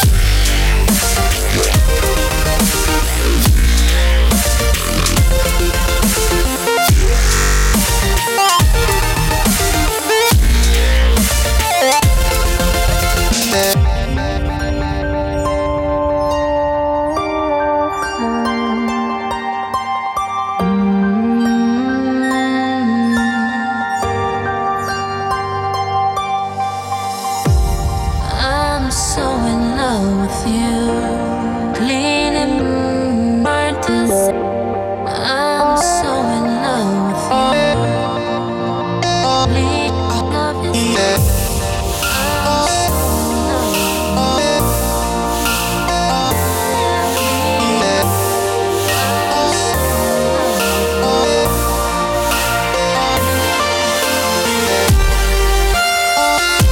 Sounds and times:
Music: 0:00.0 - 0:56.7.

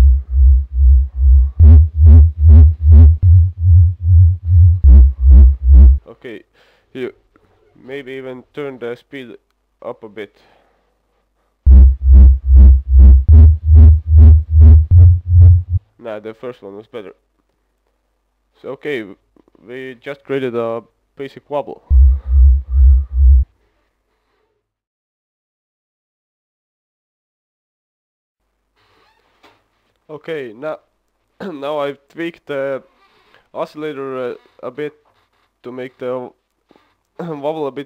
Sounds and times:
Speech: 0:06.0 - 0:10.5, 0:16.0 - 0:17.2, 0:18.6 - 0:21.9, 0:30.1 - 0:32.9, 0:33.6 - 0:36.4, 0:37.2 - 0:37.8.

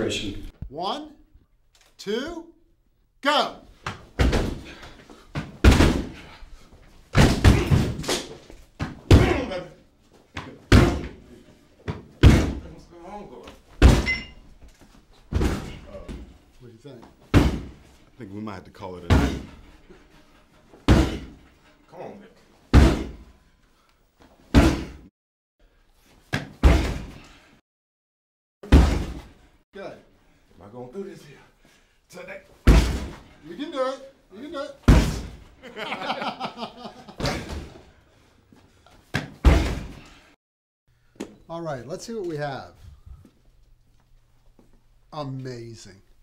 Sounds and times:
Slam: 0:05.6 - 0:06.1, 0:07.2 - 0:08.3, 0:12.2 - 0:12.6, 0:13.8 - 0:14.2, 0:17.3 - 0:17.8, 0:20.9 - 0:21.3, 0:22.7 - 0:23.2, 0:24.5 - 0:25.1, 0:26.4 - 0:27.2, 0:28.7 - 0:29.3, 0:32.7 - 0:33.2, 0:34.9 - 0:35.4, 0:37.2 - 0:37.7, 0:39.2 - 0:40.0.

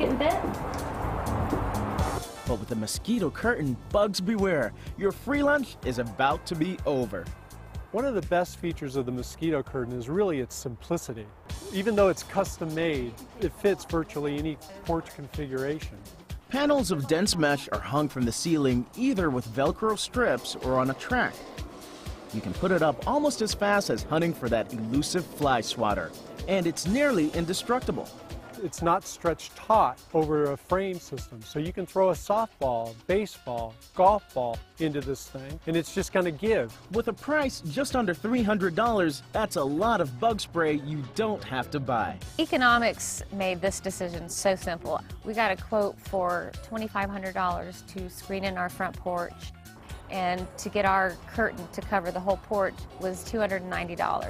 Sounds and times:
Music: 0:00.0 - 0:54.3
Speech: 0:08.0 - 0:21.4, 0:22.4 - 0:49.4, 0:50.1 - 0:54.3.

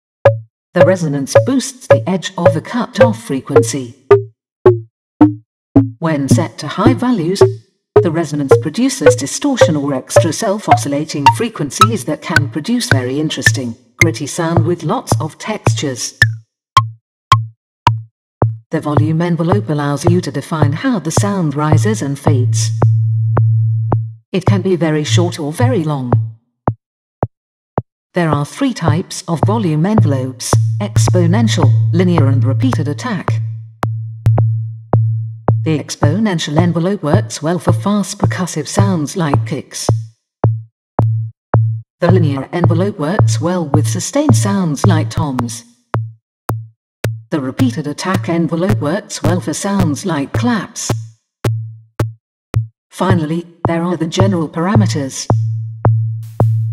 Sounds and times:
Drum machine: 0:00.3 - 0:12.0, 0:16.2 - 0:18.6, 0:29.4 - 0:34.5, 0:39.9 - 0:43.3, 0:44.3 - 0:48.8, 0:50.4 - 0:52.7, 0:55.3 - 0:56.7
Speech: 0:00.8 - 0:04.0, 0:06.0 - 0:16.2, 0:18.7 - 0:22.8, 0:24.4 - 0:26.2, 0:28.2 - 0:33.4, 0:35.7 - 0:40.0, 0:42.0 - 0:45.6, 0:47.4 - 0:51.0, 0:53.0 - 0:55.4.

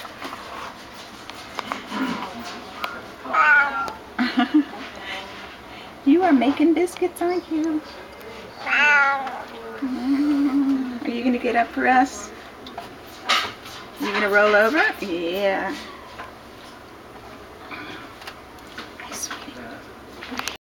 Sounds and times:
Speech: 0:06.1 - 0:08.5, 0:14.0 - 0:15.8.

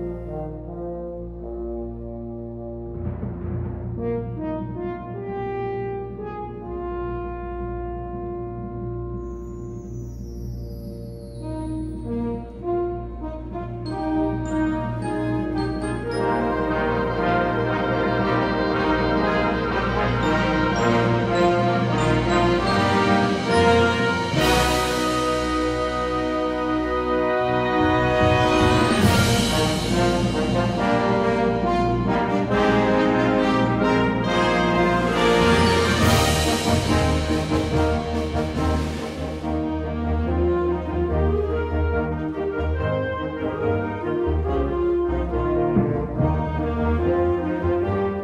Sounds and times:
Music: 0:00.0 - 0:48.2.

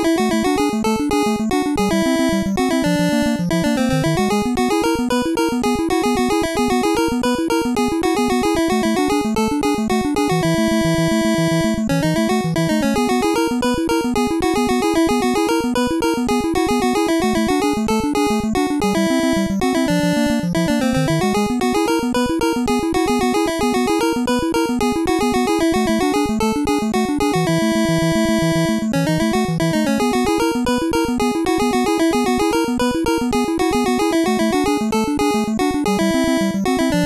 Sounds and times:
Video game music: 0:00.0 - 0:37.0.

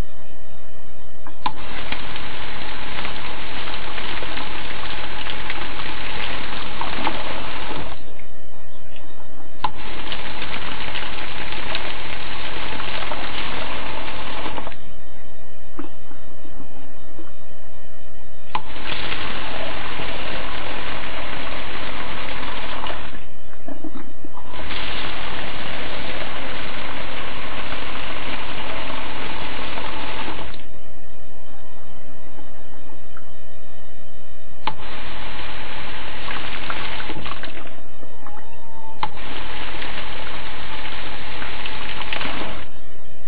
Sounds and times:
Water tap, faucet: 0:09.8 - 0:14.6.

